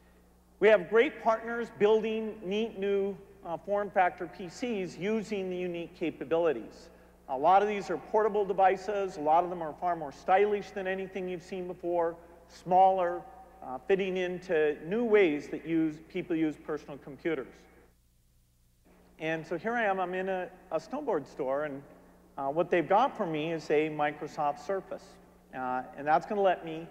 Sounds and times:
Narration, monologue: 0:00.0 - 0:26.9
Male speech, man speaking: 0:00.6 - 0:17.6, 0:19.2 - 0:26.9.

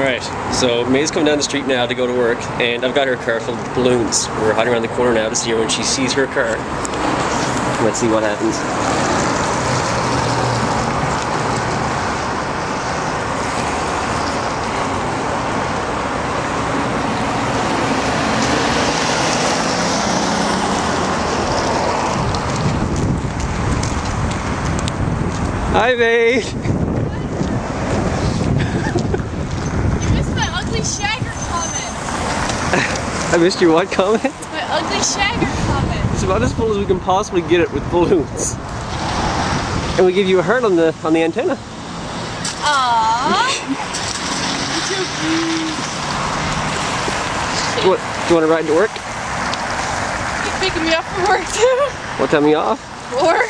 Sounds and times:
Car passing by: 0:04.4 - 0:25.2, 0:27.0 - 0:53.5.

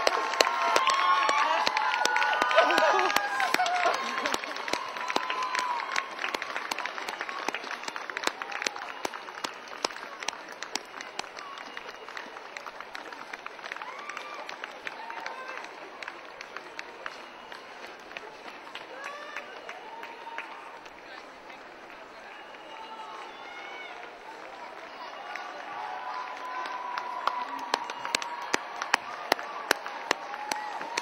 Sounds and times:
Outside, urban or manmade: 0:00.0 - 0:31.0
Run: 0:00.0 - 0:31.0
Speech: 0:20.6 - 0:27.9.

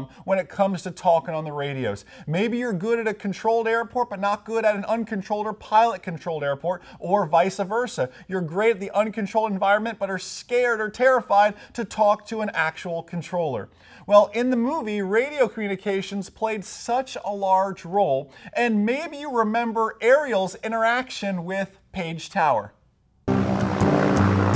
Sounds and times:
Speech: 0:00.0 - 0:22.8.

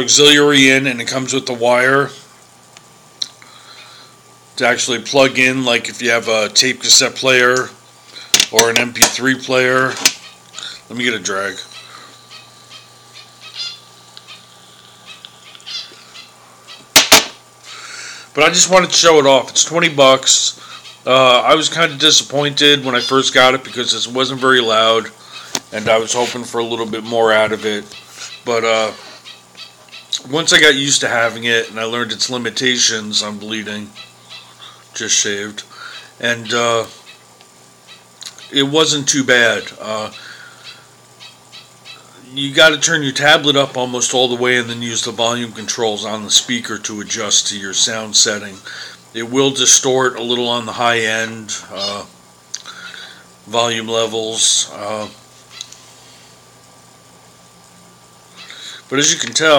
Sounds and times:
Speech: 0:00.0 - 0:02.3, 0:04.6 - 0:07.8, 0:08.5 - 0:10.0, 0:10.9 - 0:11.7, 0:18.4 - 0:29.0, 0:30.2 - 0:34.0, 0:35.0 - 0:37.0, 0:38.5 - 0:40.2, 0:42.2 - 0:52.1, 0:53.5 - 0:55.2, 0:58.9 - 0:59.5.

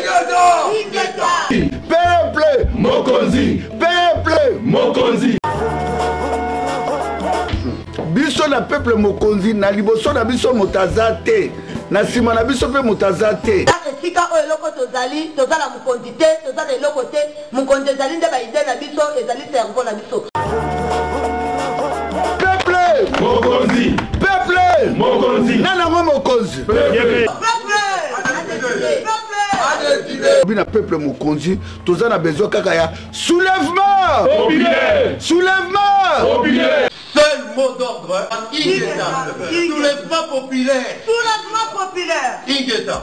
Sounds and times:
Music: 0:01.5 - 0:13.7, 0:20.4 - 0:27.3, 0:30.1 - 0:36.8.

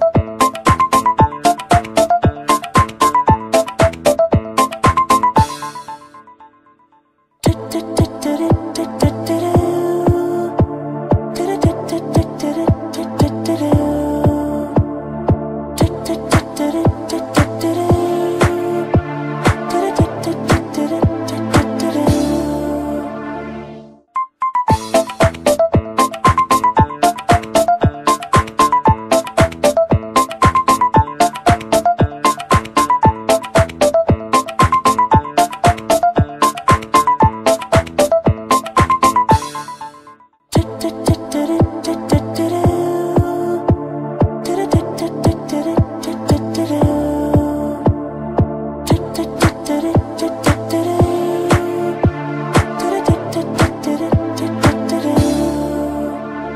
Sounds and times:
Music: 0:00.0 - 0:56.5.

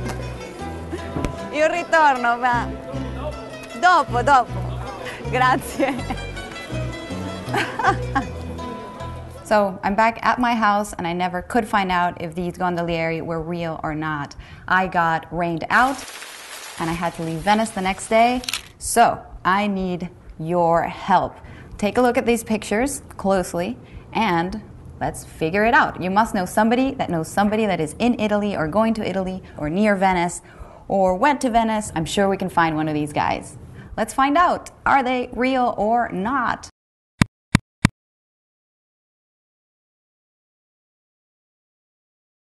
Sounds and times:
Speech: 0:09.5 - 0:16.0, 0:16.8 - 0:36.7.

